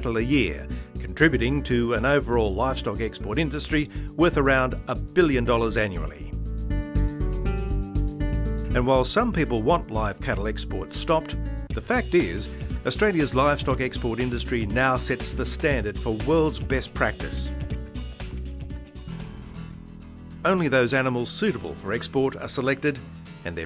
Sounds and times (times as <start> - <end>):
Speech: 0.0 - 6.3, 8.7 - 17.5, 20.4 - 23.6
Music: 0.0 - 23.6.